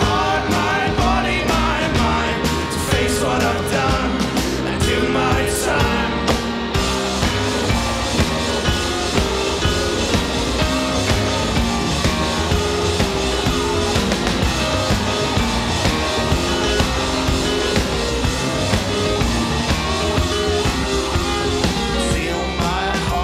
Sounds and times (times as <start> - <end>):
Rock and roll: 0.0 - 23.2.